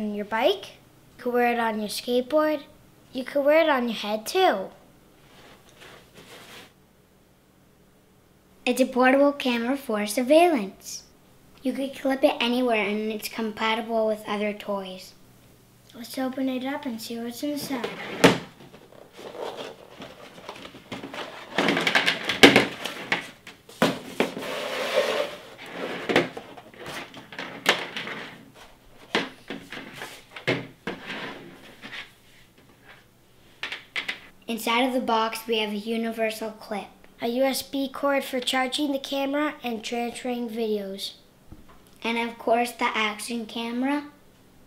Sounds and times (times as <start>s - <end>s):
Speech: 0.0s - 4.8s, 8.7s - 15.2s, 15.9s - 18.0s, 34.4s - 41.2s, 42.0s - 44.2s.